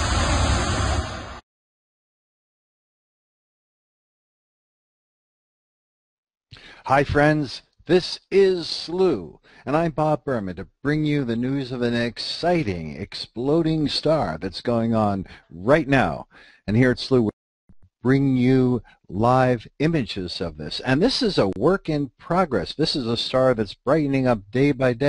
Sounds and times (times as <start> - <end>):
Speech: 6.6 - 17.4, 18.0 - 25.0.